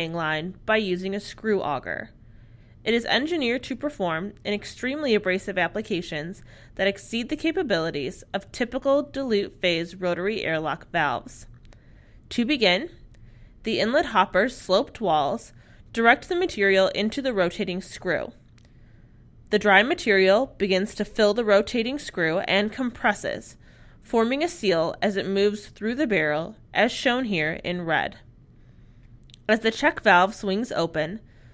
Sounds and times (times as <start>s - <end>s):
Speech: 0.0s - 2.2s, 2.9s - 11.5s, 12.3s - 13.0s, 13.7s - 18.4s, 19.5s - 28.3s, 29.4s - 31.2s.